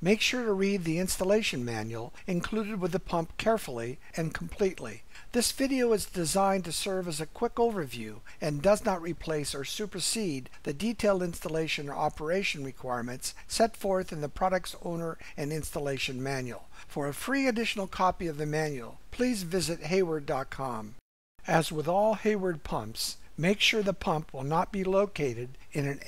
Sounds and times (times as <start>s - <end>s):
Speech: 0.0s - 26.0s.